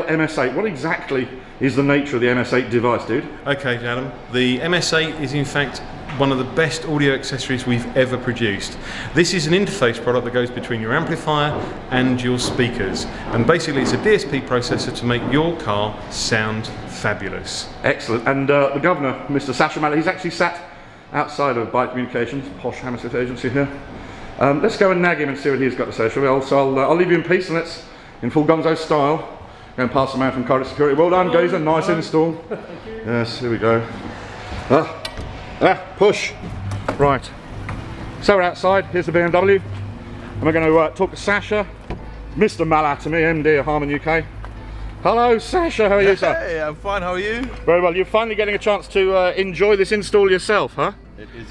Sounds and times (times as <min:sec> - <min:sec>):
Speech: 0:00.0 - 0:23.8, 0:24.4 - 0:34.0, 0:35.6 - 0:36.4, 0:38.2 - 0:39.6, 0:40.4 - 0:41.7, 0:42.4 - 0:44.3, 0:45.0 - 0:51.5.